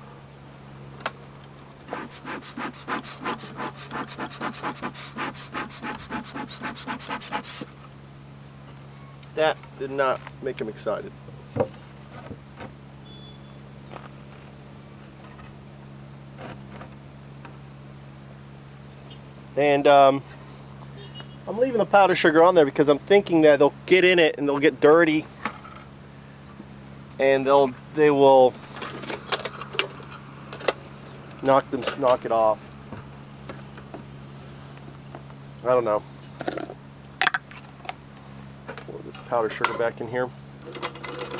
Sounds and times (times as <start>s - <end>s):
Insect: 0.0s - 41.4s
Speech: 9.4s - 11.2s, 19.6s - 20.2s, 21.5s - 25.3s, 27.2s - 28.6s, 31.4s - 32.6s, 35.6s - 36.0s, 38.9s - 40.4s.